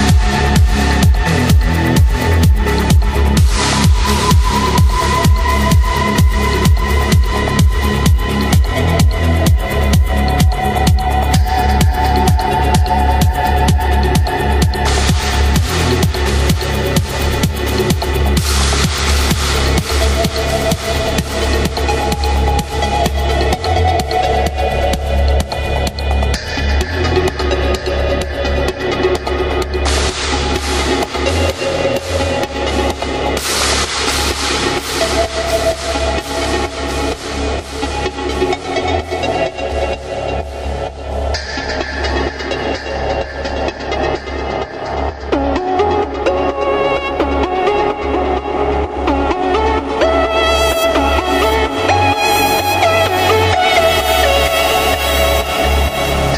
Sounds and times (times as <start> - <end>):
Electronica: 0.0 - 56.3.